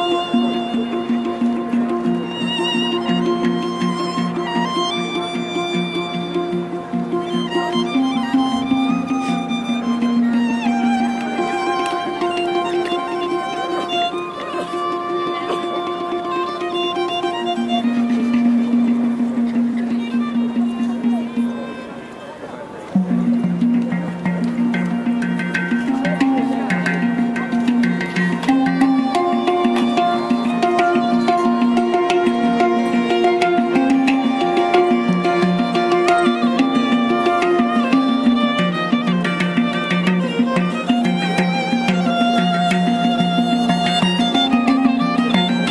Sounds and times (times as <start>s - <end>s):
Violin, fiddle: 0.0s - 25.2s, 25.8s - 45.7s.